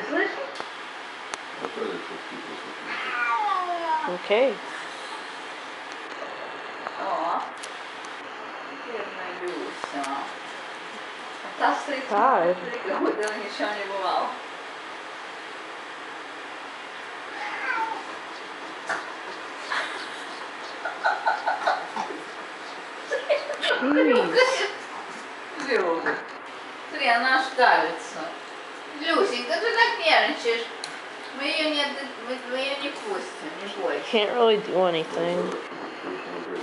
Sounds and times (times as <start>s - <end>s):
Meow: 2.9s - 4.0s, 17.3s - 18.1s.